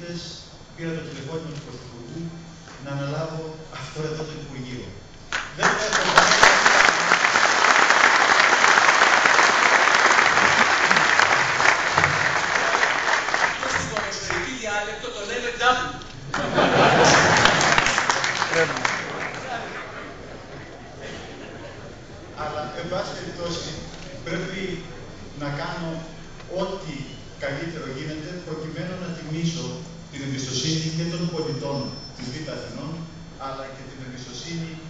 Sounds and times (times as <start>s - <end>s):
Male speech, man speaking: 0.0s - 5.0s, 5.6s - 6.7s, 13.6s - 16.1s, 18.5s - 19.8s, 22.4s - 34.9s.